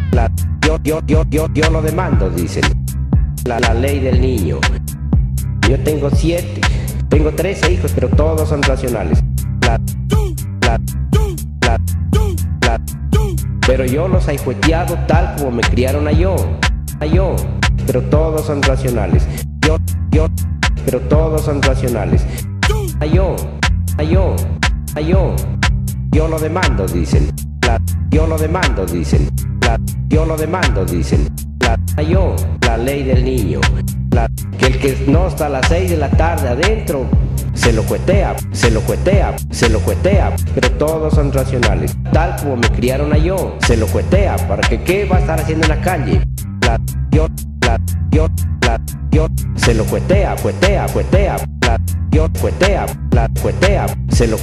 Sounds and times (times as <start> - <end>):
Music: 0.0 - 54.4.